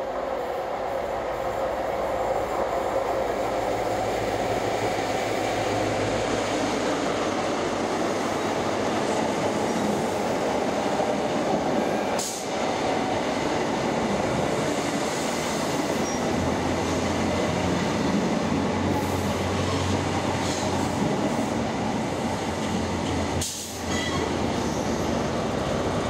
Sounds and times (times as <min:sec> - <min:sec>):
Railroad car, train wagon: 0:00.0 - 0:26.1
Subway, metro, underground: 0:00.0 - 0:26.1
Train: 0:00.0 - 0:26.1.